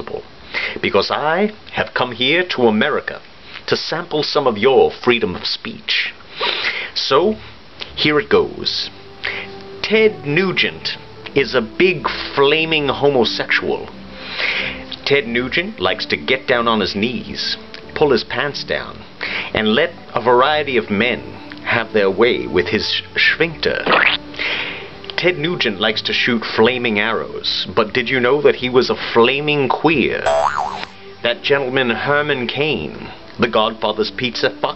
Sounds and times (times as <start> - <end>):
Male speech, man speaking: 0.0 - 0.2, 0.8 - 6.2, 7.0 - 7.4, 8.0 - 8.9, 9.8 - 13.9, 15.0 - 23.9, 25.2 - 30.3, 31.3 - 34.7
Music: 7.2 - 30.3, 30.9 - 34.7.